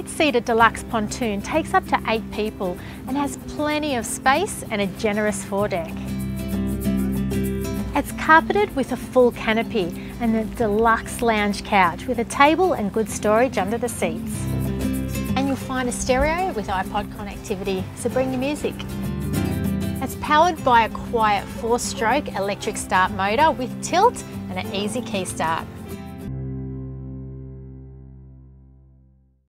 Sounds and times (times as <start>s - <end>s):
Music: 0.0s - 29.5s.